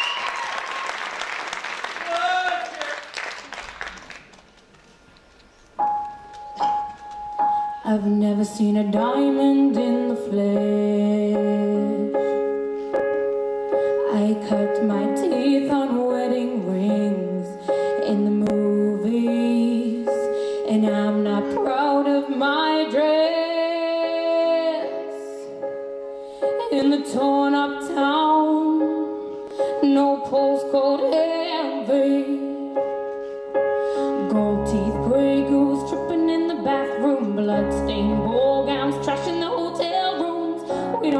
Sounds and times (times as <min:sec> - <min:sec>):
Music: 0:04.8 - 0:41.1
Female singing: 0:07.8 - 0:12.1, 0:14.0 - 0:25.5, 0:26.6 - 0:29.1, 0:29.8 - 0:32.7, 0:34.2 - 0:41.1.